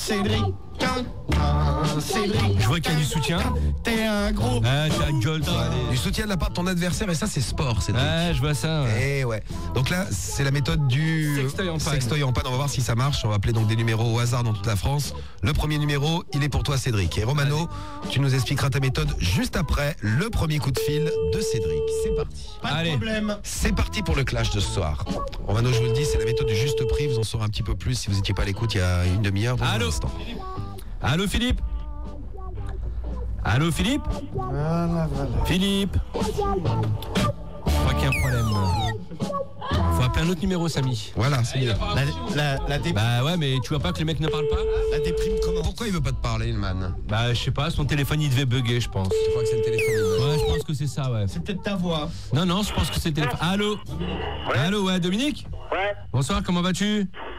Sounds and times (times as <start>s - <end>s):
Music: 0.0s - 55.6s
Speech: 4.7s - 31.6s, 39.9s - 53.8s
Radio: 25.5s - 27.4s, 37.8s - 38.9s, 48.9s - 50.7s, 52.3s - 56.2s, 56.8s - 57.3s.